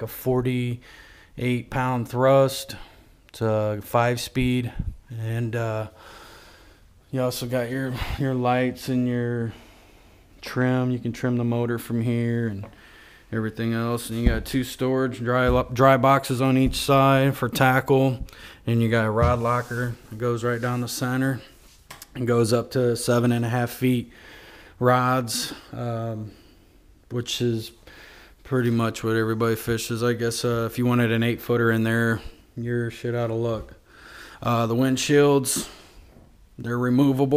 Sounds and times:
Speech: 0.0s - 0.8s, 1.4s - 6.0s, 7.1s - 9.6s, 10.4s - 12.7s, 13.3s - 24.1s, 24.8s - 26.4s, 27.1s - 27.8s, 28.4s - 33.8s, 34.4s - 35.8s, 36.6s - 37.3s.

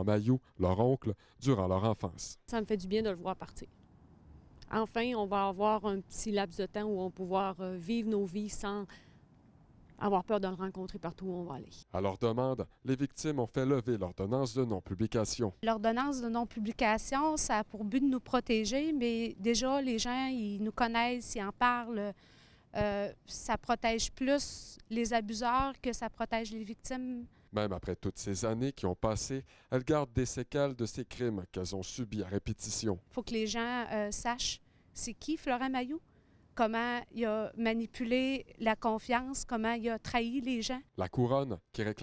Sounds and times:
Speech: 0.0s - 3.6s, 4.7s - 8.9s, 10.0s - 22.1s, 22.8s - 36.0s, 36.6s - 42.0s.

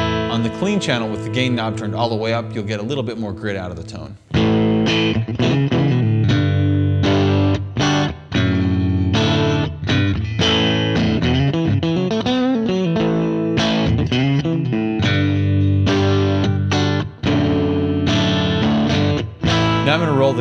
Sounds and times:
Electric guitar: 0.0s - 2.7s, 4.2s - 20.4s
Bass guitar: 0.0s - 20.4s
Distortion: 0.0s - 20.4s.

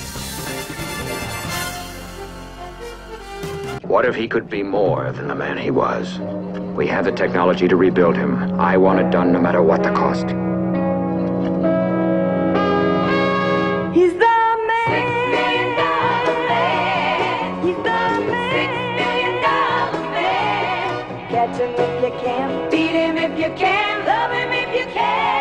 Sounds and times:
Music: 0.0s - 25.4s
Speech: 3.8s - 6.2s, 6.8s - 10.4s.

